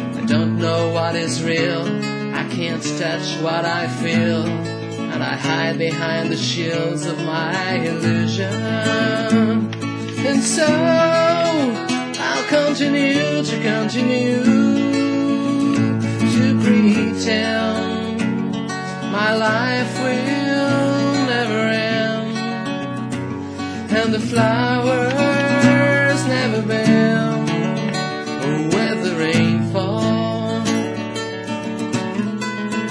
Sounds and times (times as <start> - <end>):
Acoustic guitar: 0.0 - 32.9
Strum: 0.0 - 32.9.